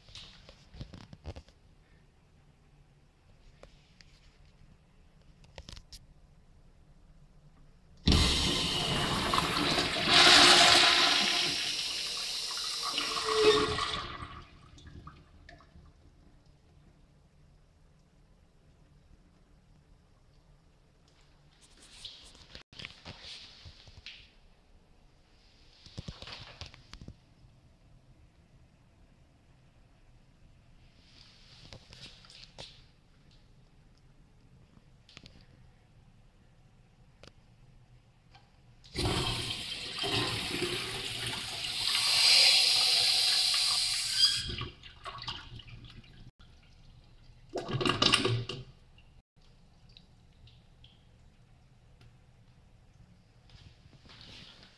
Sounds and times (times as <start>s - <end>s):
Toilet flush: 8.1s - 15.8s, 38.9s - 46.2s, 47.5s - 48.7s
Water: 12.2s - 20.8s, 43.3s - 54.3s.